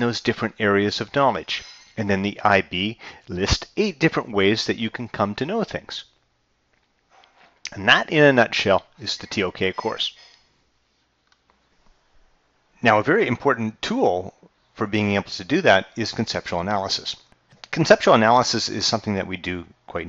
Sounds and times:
Speech: 0.0s - 6.1s, 7.7s - 10.2s, 12.8s - 20.0s.

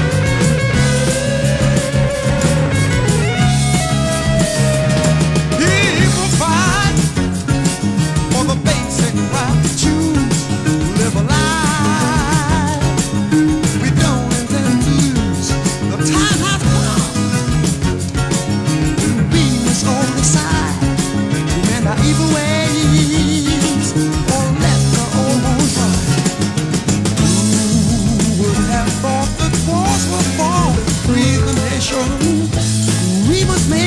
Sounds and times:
Ska: 0.0s - 33.8s.

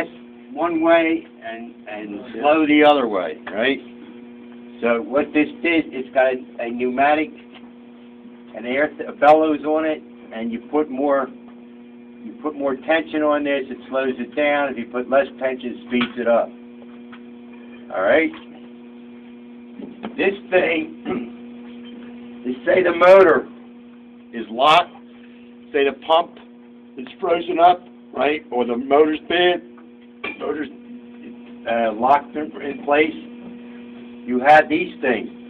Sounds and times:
Speech: 0.0s - 3.9s, 4.8s - 7.4s, 8.5s - 11.4s, 12.2s - 16.6s, 17.9s - 18.5s, 20.2s - 21.3s, 22.4s - 23.6s, 24.3s - 25.0s, 25.7s - 29.7s, 30.4s - 30.8s, 31.6s - 33.3s, 34.3s - 35.4s.

